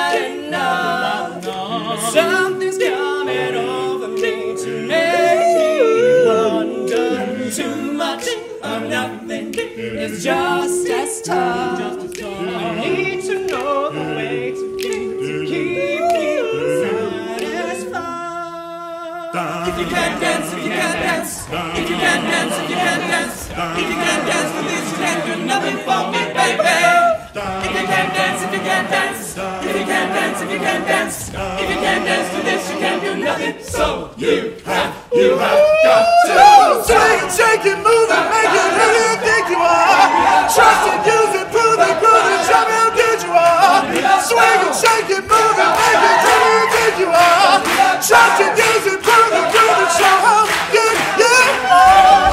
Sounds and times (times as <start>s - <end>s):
A capella: 0.0s - 52.3s
Choir: 0.0s - 52.3s.